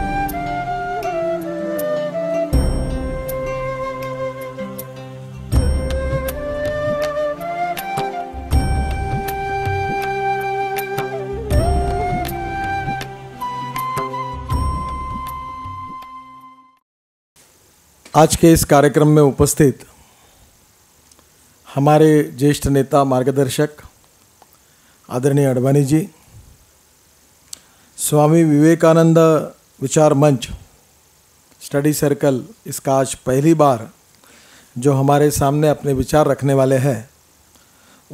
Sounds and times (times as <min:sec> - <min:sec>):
Music: 0:00.0 - 0:16.8
Male speech, man speaking: 0:18.2 - 0:19.9, 0:21.7 - 0:23.9, 0:25.1 - 0:26.2, 0:28.0 - 0:30.6, 0:31.6 - 0:34.0, 0:34.8 - 0:37.1.